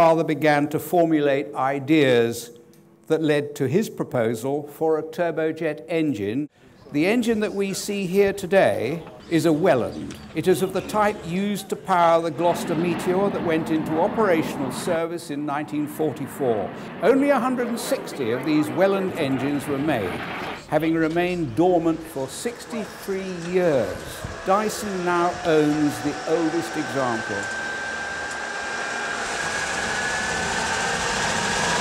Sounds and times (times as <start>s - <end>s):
Speech: 0.0s - 27.5s.